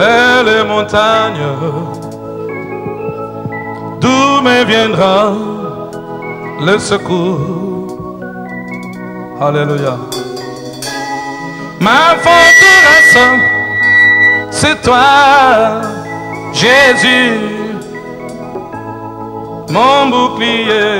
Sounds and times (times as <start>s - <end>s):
Music: 0.0s - 20.9s.